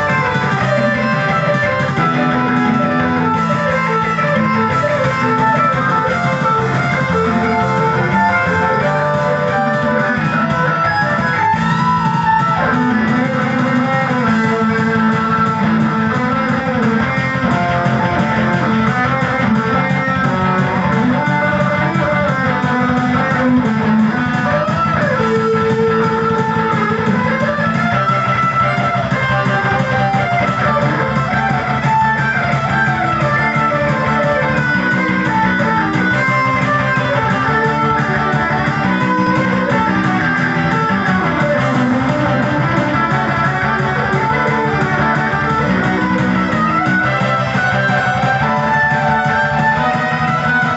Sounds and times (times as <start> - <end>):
Guitar: 0.0 - 50.7.